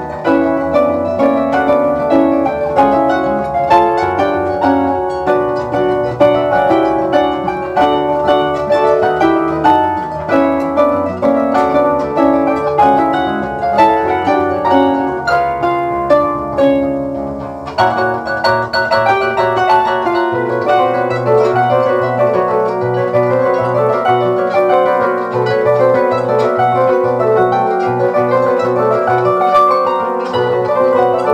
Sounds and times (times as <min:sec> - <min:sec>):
Harp: 0:00.0 - 0:31.3
Pizzicato: 0:00.0 - 0:31.3.